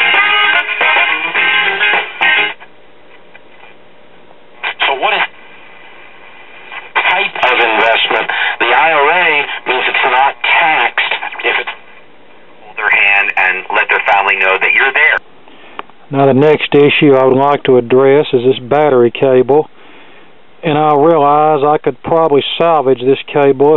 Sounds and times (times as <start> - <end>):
Radio: 4.6 - 5.4, 6.7 - 11.8, 12.6 - 15.2
Speech: 4.7 - 5.3, 7.0 - 11.8, 12.6 - 15.2, 16.1 - 19.7, 20.6 - 23.7.